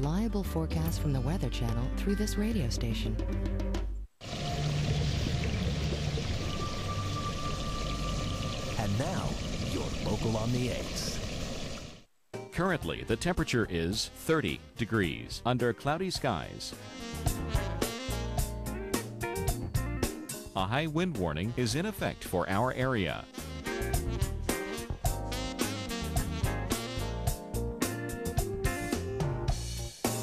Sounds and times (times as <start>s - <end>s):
Speech: 0.0s - 3.2s, 8.8s - 11.2s, 12.5s - 16.8s, 20.6s - 23.3s
Music: 0.0s - 9.4s, 12.3s - 30.2s.